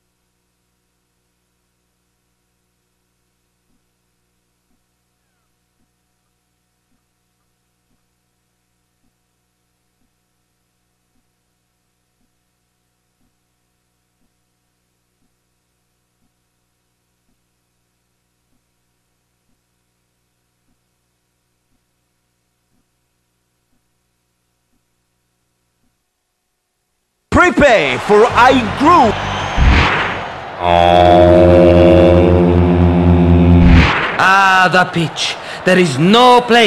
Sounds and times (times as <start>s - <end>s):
Speech: 27.3s - 29.2s, 30.6s - 31.5s, 34.2s - 36.6s.